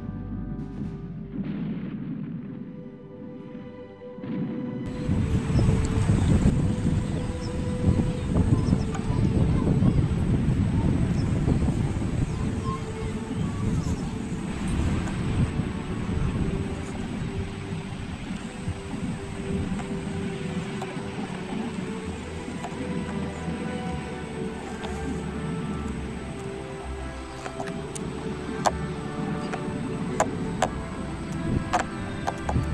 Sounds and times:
Music: 0.0s - 32.7s
Outside, rural or natural: 0.0s - 32.7s
Speech: 8.4s - 14.3s.

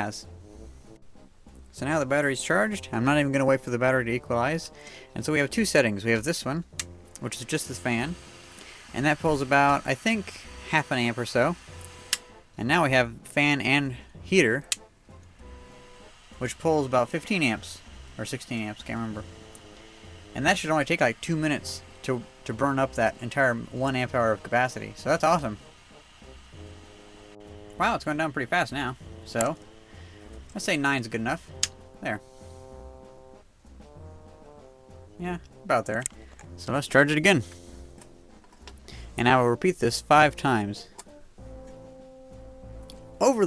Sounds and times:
Speech: 0.0s - 0.3s, 1.7s - 6.6s, 7.2s - 8.2s, 8.9s - 11.6s, 12.6s - 14.7s, 16.4s - 19.3s, 20.4s - 25.6s, 27.8s - 29.6s, 30.6s - 31.4s, 32.0s - 32.2s, 35.2s - 37.5s, 39.2s - 40.9s, 43.2s - 43.4s
Music: 0.0s - 43.4s.

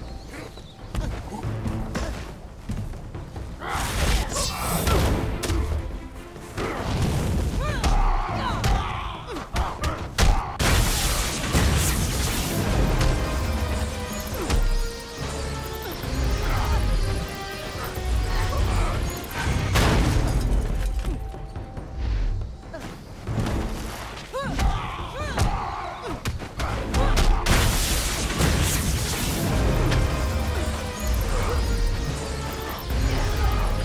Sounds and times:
Whack, thwack: 7.0s - 12.0s
Sound effect: 10.3s - 21.2s, 26.6s - 33.8s.

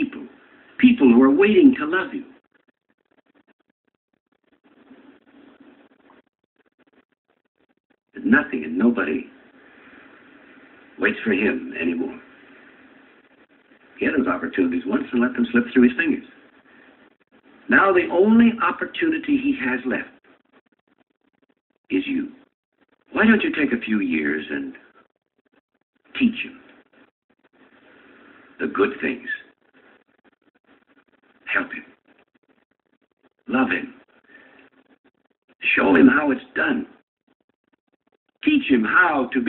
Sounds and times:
Speech: 0.0s - 2.4s, 8.2s - 9.4s, 11.0s - 12.3s, 14.0s - 16.4s, 17.7s - 20.2s, 21.9s - 22.4s, 23.1s - 24.9s, 26.2s - 26.6s, 28.6s - 29.5s, 31.4s - 32.0s, 33.5s - 34.0s, 35.6s - 37.0s, 38.4s - 39.4s.

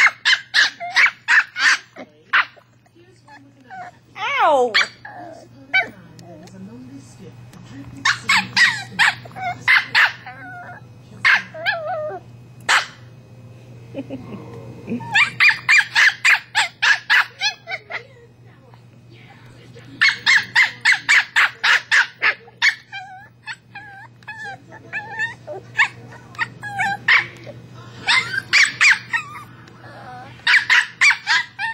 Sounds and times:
Bark: 0.0s - 2.6s, 4.8s - 5.0s, 8.0s - 11.9s, 12.7s - 13.1s, 15.2s - 18.0s, 20.0s - 23.1s, 24.4s - 27.4s, 28.1s - 29.4s, 30.5s - 31.7s
Yip: 0.0s - 2.6s, 4.8s - 5.9s, 8.0s - 13.0s, 15.0s - 18.0s, 20.0s - 27.4s, 28.1s - 29.5s, 30.5s - 31.7s
Speech: 1.9s - 11.8s, 17.1s - 22.9s, 24.3s - 28.3s
Whimper (dog): 3.3s - 5.9s, 8.1s - 12.2s, 14.9s - 15.8s, 16.6s - 18.0s, 22.2s - 31.7s.

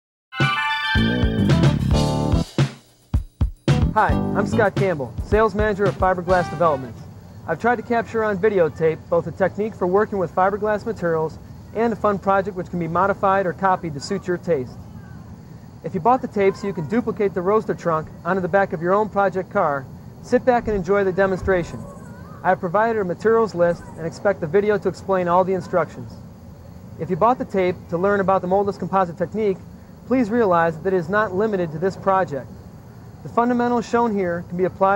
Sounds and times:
Music: 0.3s - 6.9s
Speech: 4.0s - 15.2s, 15.8s - 26.2s, 27.0s - 32.5s, 33.2s - 34.9s.

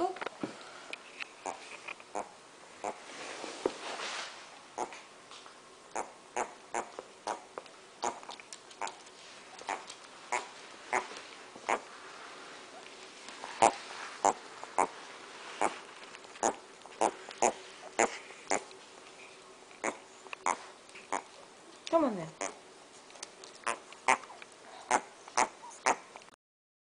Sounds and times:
Speech: 0.0s - 0.2s, 21.9s - 22.4s.

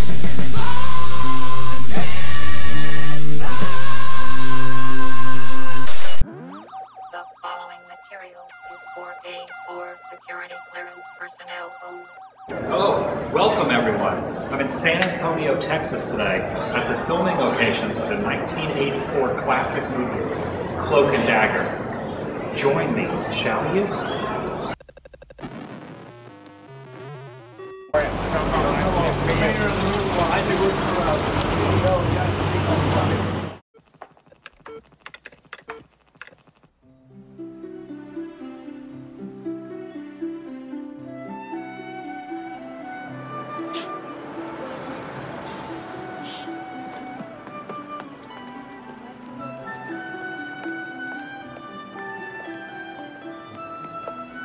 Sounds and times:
Speech: 7.2s - 20.2s, 20.8s - 21.7s, 28.0s - 33.4s.

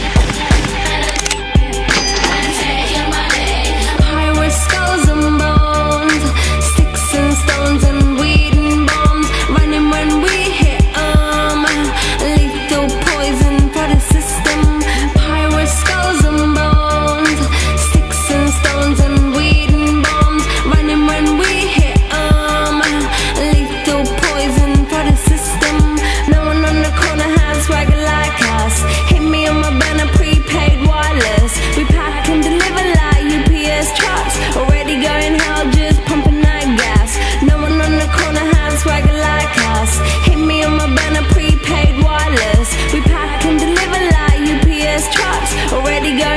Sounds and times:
Rhythm and blues: 0.0s - 46.3s.

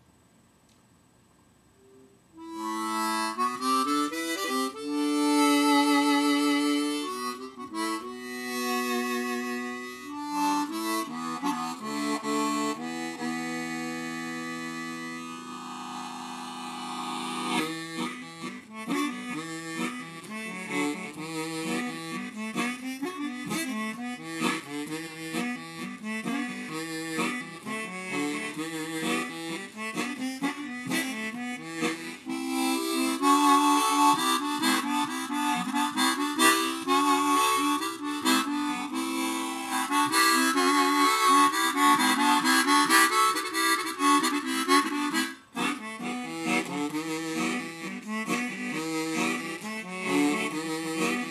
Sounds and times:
Harmonica: 1.9s - 51.3s.

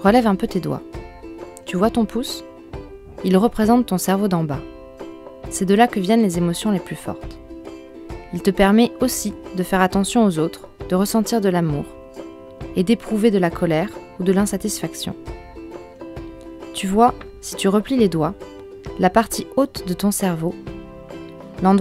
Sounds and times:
Speech: 0.0s - 0.8s, 1.6s - 2.5s, 3.2s - 4.7s, 5.5s - 7.4s, 8.3s - 11.9s, 12.8s - 15.2s, 16.8s - 18.4s, 19.0s - 20.6s, 21.6s - 21.8s
Music: 0.0s - 21.8s.

